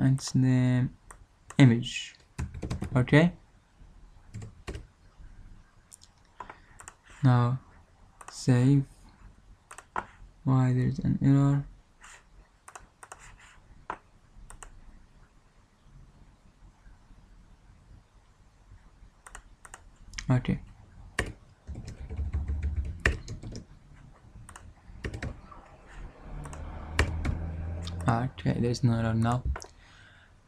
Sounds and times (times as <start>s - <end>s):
Speech: 0.0s - 1.0s, 1.6s - 2.2s, 3.0s - 3.4s, 7.2s - 7.6s, 8.3s - 8.9s, 10.5s - 11.7s, 20.2s - 20.6s, 27.9s - 29.6s
Clicking: 6.0s - 7.0s, 14.5s - 14.7s, 19.2s - 20.3s.